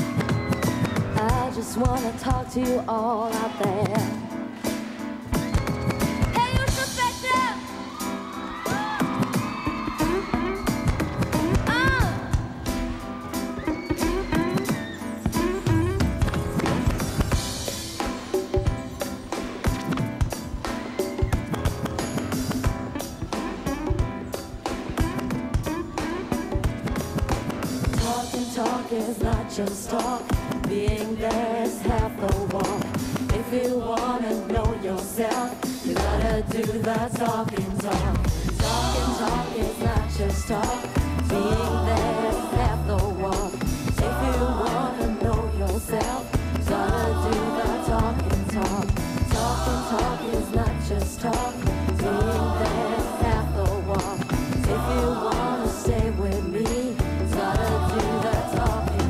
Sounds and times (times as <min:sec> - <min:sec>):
Music: 0:00.0 - 0:59.1.